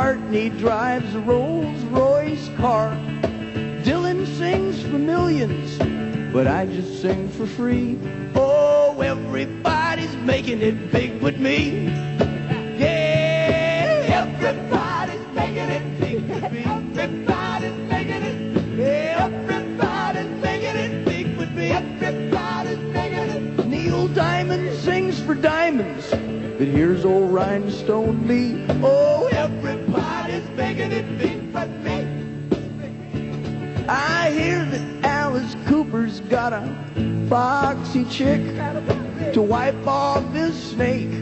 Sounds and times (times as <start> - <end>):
Music: 0.0 - 41.2.